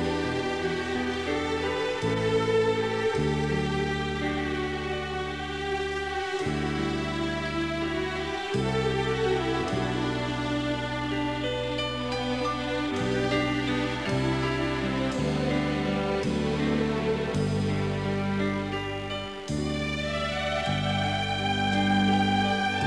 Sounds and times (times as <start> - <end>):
Music: 0.0 - 22.8.